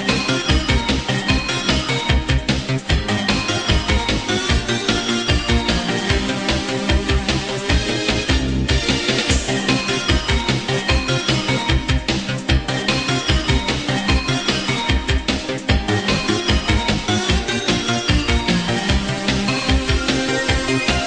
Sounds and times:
Music: 0.0s - 21.0s.

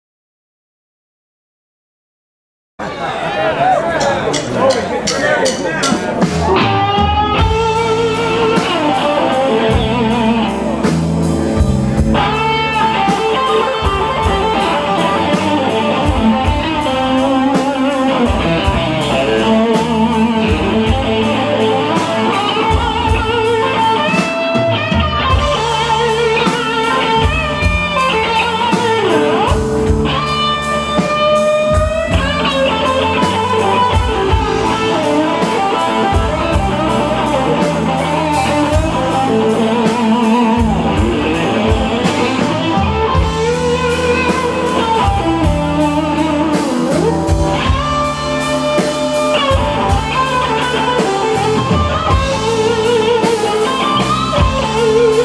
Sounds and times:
Music: 3.9s - 55.2s.

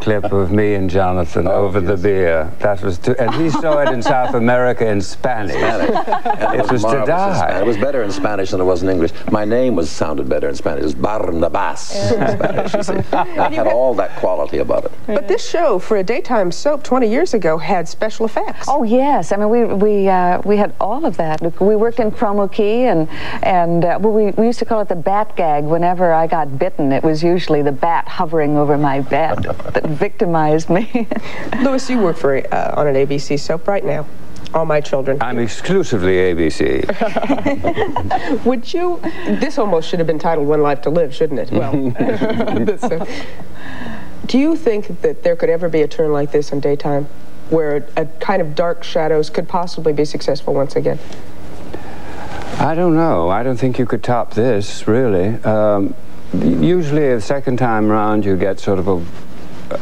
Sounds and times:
Female speech, woman speaking: 11.9s - 14.0s, 15.1s - 35.3s, 38.3s - 42.0s, 44.3s - 51.0s.

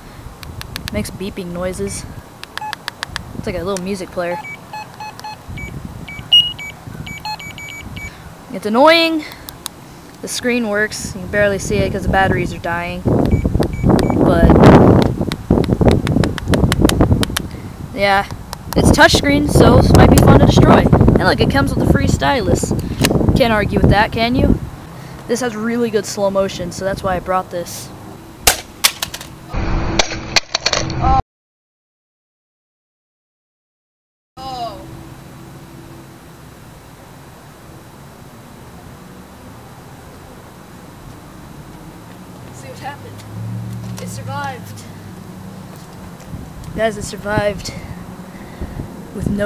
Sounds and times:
Speech: 0.9s - 2.1s, 3.4s - 4.4s, 8.5s - 9.3s, 10.2s - 13.1s, 14.3s - 14.6s, 18.0s - 22.8s, 23.4s - 24.6s, 25.3s - 27.9s, 34.4s - 34.9s, 42.6s - 43.2s, 44.0s - 45.0s, 46.8s - 48.0s, 49.2s - 49.4s.

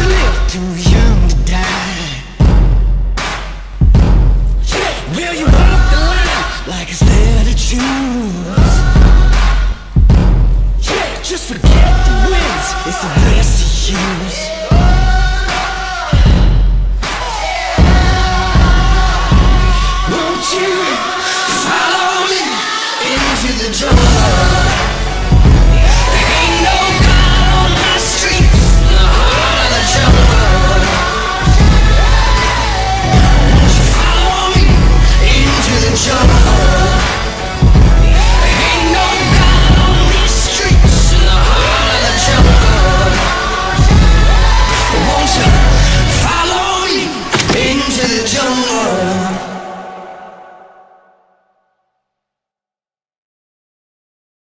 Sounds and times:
Music: 0.0s - 52.4s.

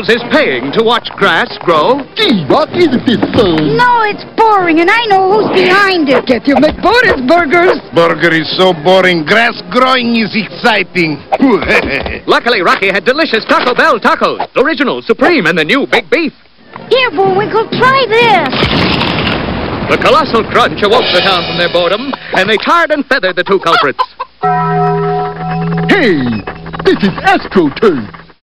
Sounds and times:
Music: 8.7s - 11.5s, 21.0s - 22.4s, 24.4s - 27.2s.

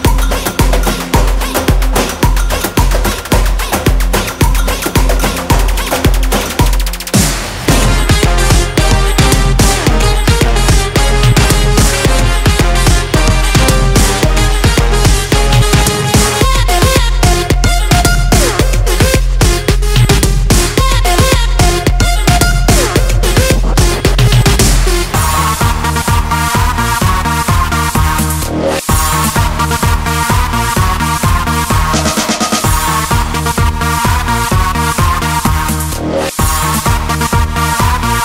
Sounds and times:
Disco: 0.0s - 38.2s.

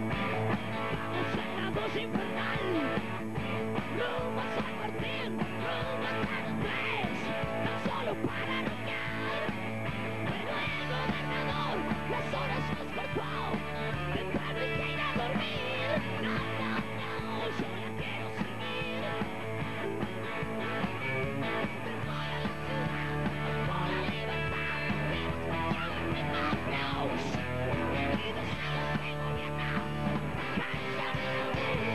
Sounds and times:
Rock and roll: 0.0s - 31.9s.

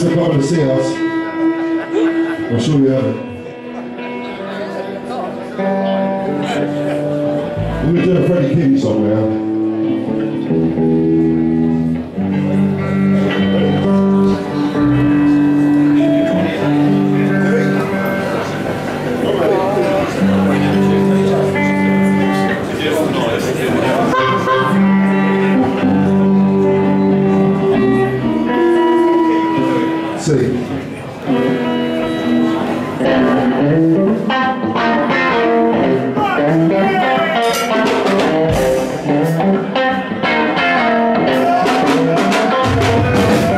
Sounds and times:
Speech: 0.0s - 1.0s, 7.8s - 9.4s, 19.2s - 24.2s, 36.2s - 37.6s
Music: 0.0s - 43.5s.

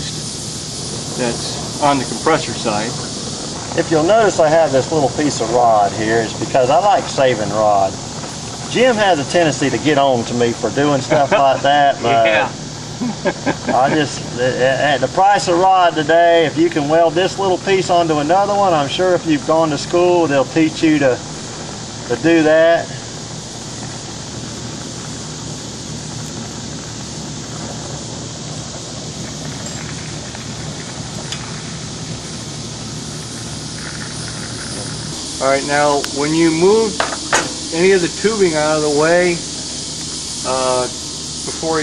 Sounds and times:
Speech: 1.2s - 3.0s, 3.8s - 8.0s, 8.7s - 12.6s, 13.7s - 21.2s, 22.1s - 23.0s, 35.4s - 37.0s, 37.7s - 39.4s, 40.5s - 40.9s, 41.5s - 41.8s.

